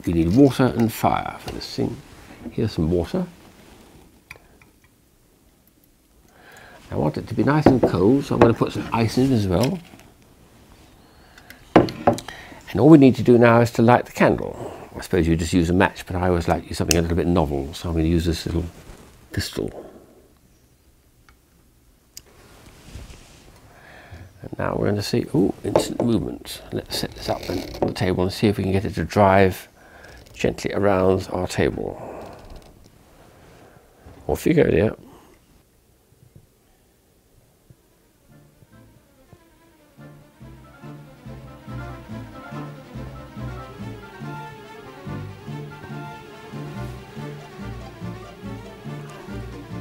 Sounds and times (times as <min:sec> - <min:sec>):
Speech: 0:00.0 - 0:03.4, 0:06.9 - 0:09.9, 0:12.7 - 0:20.0, 0:24.4 - 0:29.7, 0:30.4 - 0:32.1, 0:34.2 - 0:35.1.